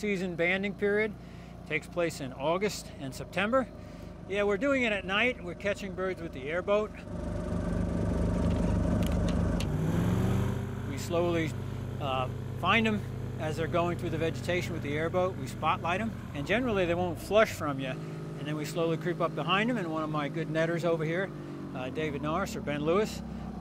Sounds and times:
Speech: 0:00.0 - 0:01.1, 0:01.7 - 0:03.7, 0:04.3 - 0:07.0, 0:10.9 - 0:23.2.

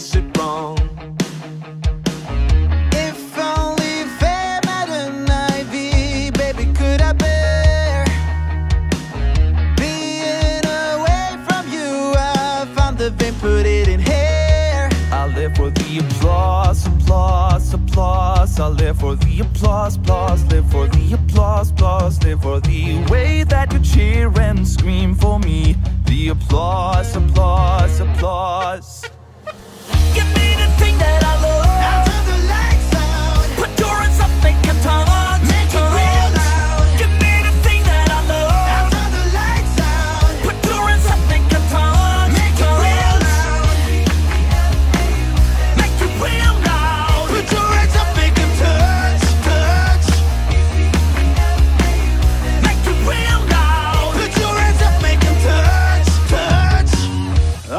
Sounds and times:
Rock and roll: 0:00.0 - 0:57.7.

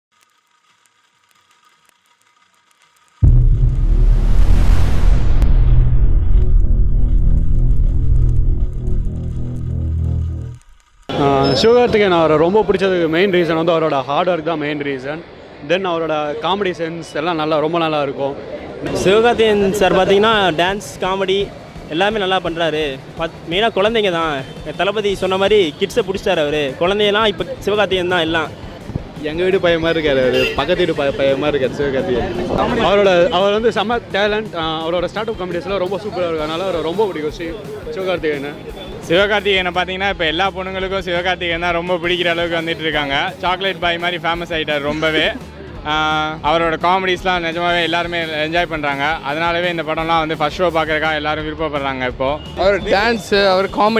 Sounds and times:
Didgeridoo: 0:03.2 - 0:10.8.

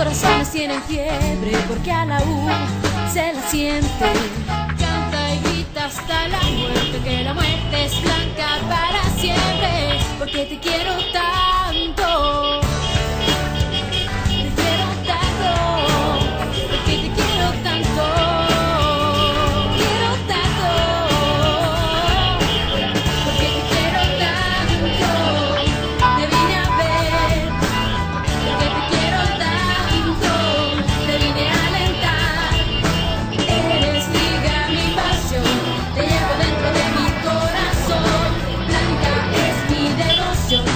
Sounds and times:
Car: 0:00.0 - 0:40.7
Music: 0:00.0 - 0:40.7
Traffic noise, roadway noise: 0:00.0 - 0:40.7.

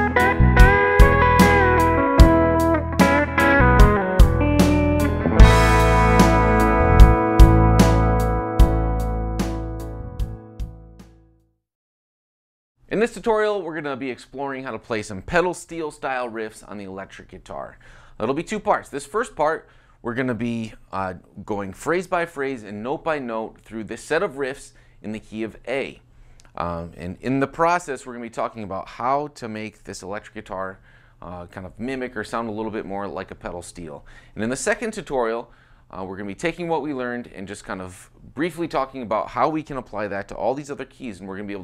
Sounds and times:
Music: 0:00.0 - 0:11.5
Speech: 0:12.9 - 0:26.0, 0:26.6 - 0:41.6.

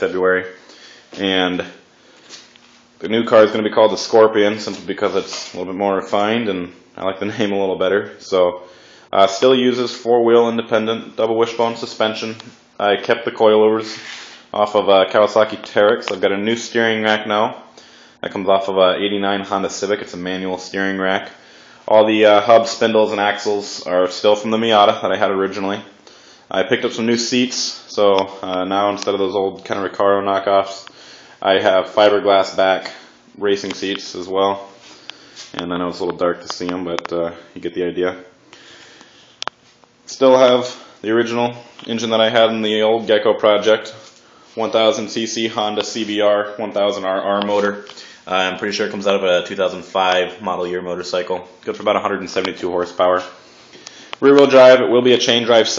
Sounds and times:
Speech: 0:00.0 - 0:00.6, 0:01.2 - 0:01.8, 0:03.0 - 0:34.8, 0:35.5 - 0:38.4, 0:40.1 - 0:53.4, 0:54.2 - 0:55.7.

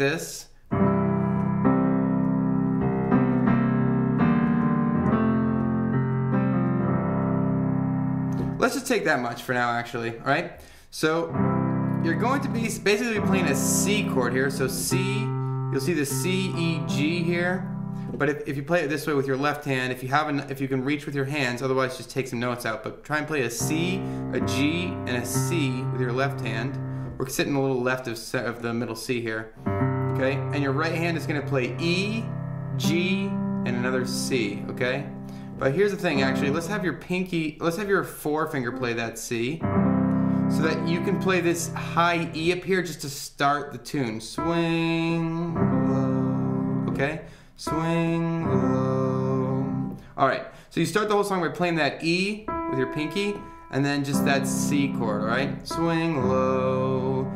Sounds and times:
Speech: 0:00.0 - 0:00.6, 0:08.6 - 0:11.4, 0:12.0 - 0:29.6, 0:30.2 - 0:39.6, 0:40.5 - 0:46.2, 0:46.9 - 0:57.3
Music: 0:00.7 - 0:08.7, 0:11.2 - 0:18.5, 0:23.6 - 0:27.4, 0:29.5 - 0:37.0, 0:39.5 - 0:42.8, 0:44.4 - 0:50.2, 0:52.3 - 0:57.3.

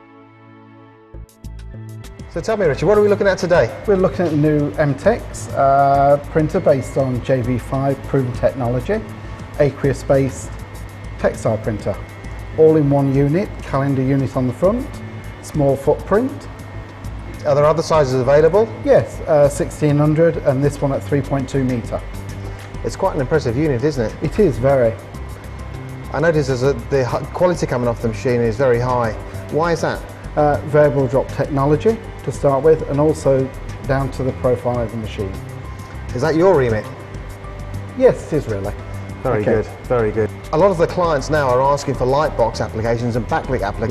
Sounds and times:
Music: 0:00.0 - 0:43.9
Speech: 0:02.4 - 0:10.5, 0:11.2 - 0:12.0, 0:12.6 - 0:14.9, 0:15.5 - 0:16.4, 0:17.4 - 0:22.0, 0:22.8 - 0:25.0, 0:26.2 - 0:35.4, 0:36.1 - 0:37.0, 0:38.0 - 0:43.9.

